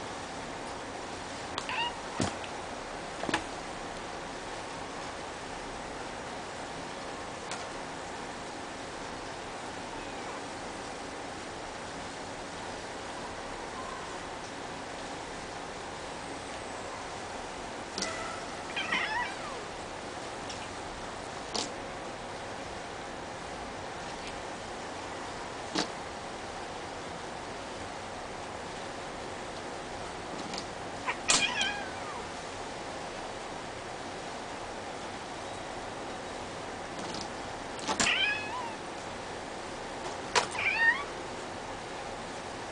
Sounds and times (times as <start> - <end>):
Meow: 1.6 - 2.2, 9.9 - 10.4, 18.0 - 19.7, 31.1 - 32.3, 38.0 - 38.8, 40.5 - 41.2
Caterwaul: 18.0 - 19.7, 31.1 - 32.3, 38.0 - 38.8, 40.5 - 41.1.